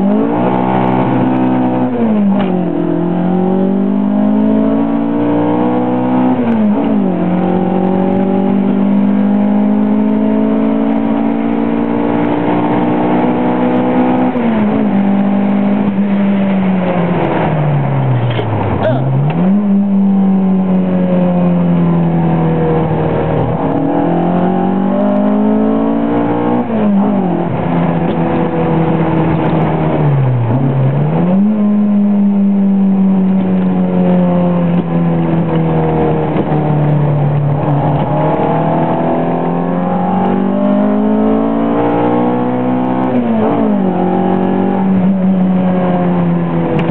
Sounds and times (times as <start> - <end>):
Car: 0.0 - 46.9.